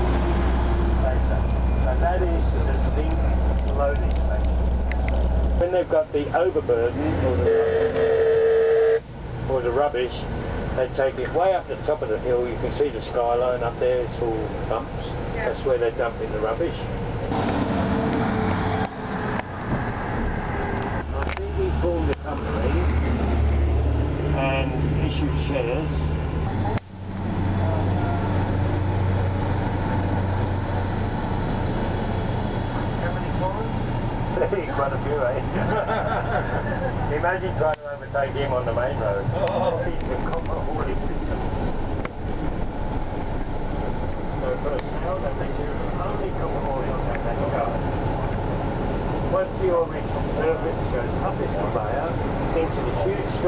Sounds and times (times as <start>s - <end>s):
Outside, rural or natural: 0.0s - 53.4s
Vehicle: 0.0s - 53.4s
Speech: 1.0s - 4.5s, 5.6s - 7.8s, 9.5s - 16.9s, 21.1s - 23.0s, 24.4s - 26.7s, 33.0s - 33.8s, 34.4s - 35.6s, 37.1s - 41.4s, 44.4s - 47.8s, 49.3s - 53.4s.